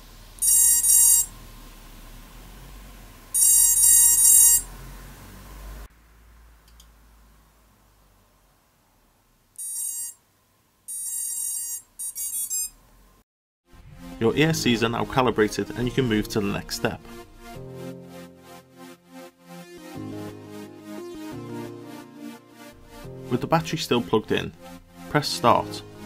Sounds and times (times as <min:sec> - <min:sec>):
Silence: 0:00.0 - 0:00.4, 0:01.3 - 0:03.4, 0:04.6 - 0:09.6, 0:12.7 - 0:14.4.